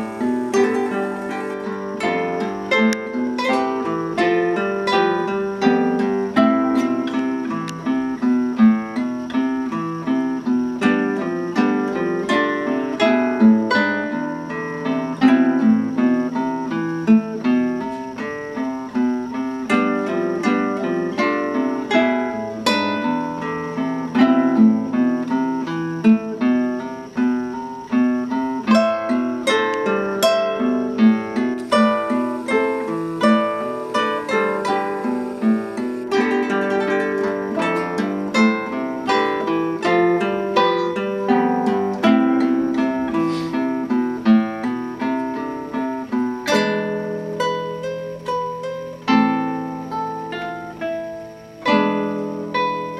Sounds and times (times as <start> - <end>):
Acoustic guitar: 0.0 - 52.9.